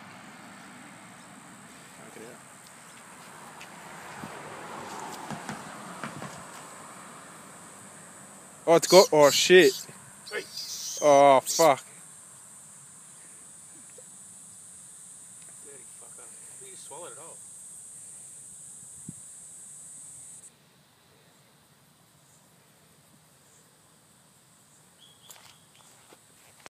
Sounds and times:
Outside, rural or natural: 0.0 - 26.7.

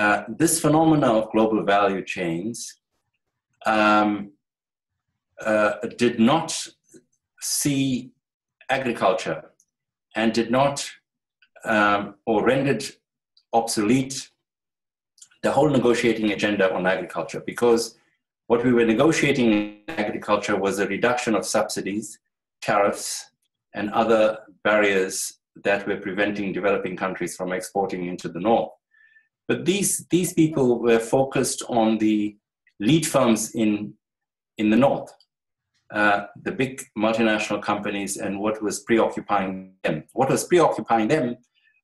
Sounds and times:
Narration, monologue: 0.0 - 41.8.

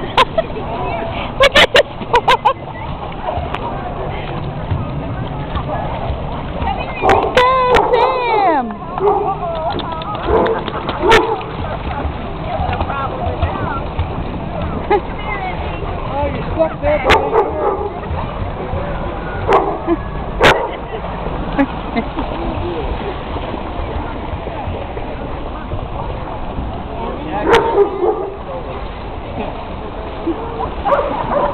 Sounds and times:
Bow-wow: 10.3 - 11.5, 20.4 - 20.8, 27.4 - 28.4, 30.5 - 31.5.

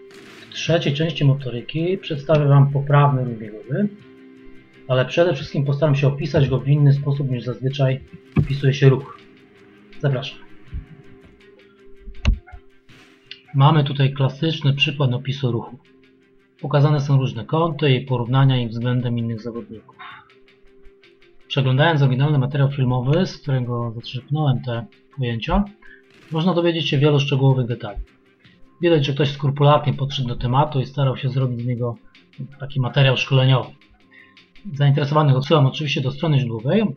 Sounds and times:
Speech: 0.5 - 4.0, 4.9 - 9.2, 10.0 - 10.5, 13.3 - 15.8, 16.6 - 20.2, 21.5 - 28.0, 28.8 - 33.8, 34.6 - 36.9.

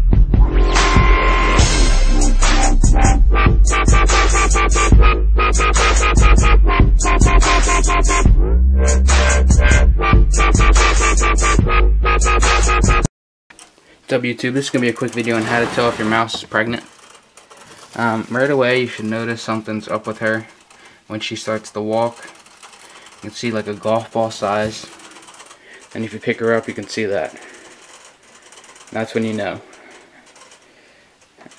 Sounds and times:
Speech: 14.1 - 16.9, 18.0 - 20.5, 21.1 - 22.4, 23.2 - 24.9, 26.0 - 27.4, 28.9 - 29.6.

